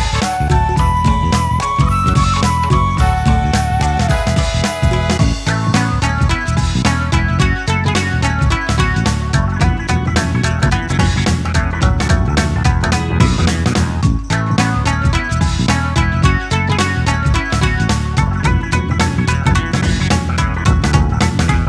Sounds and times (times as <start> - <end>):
Music: 0.0 - 21.6.